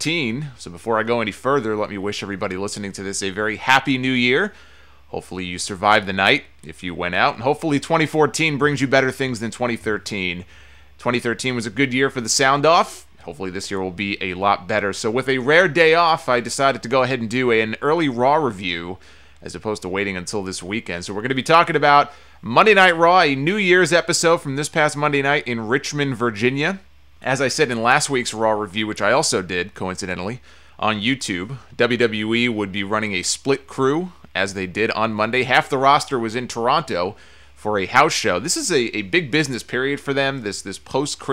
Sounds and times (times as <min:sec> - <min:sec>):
Speech: 0:00.0 - 0:41.3.